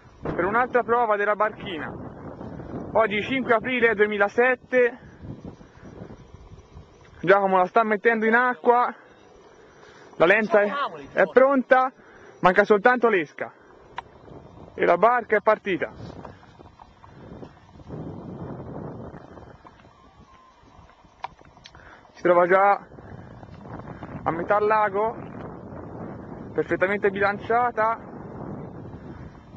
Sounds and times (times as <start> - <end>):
Speech: 14.8 - 16.0, 26.6 - 28.0.